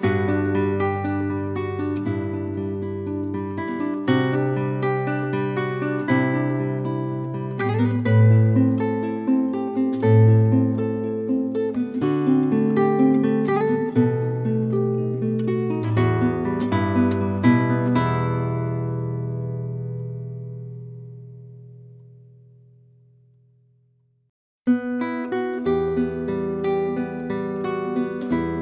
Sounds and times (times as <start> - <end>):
Acoustic guitar: 0.0 - 23.5, 24.7 - 28.6.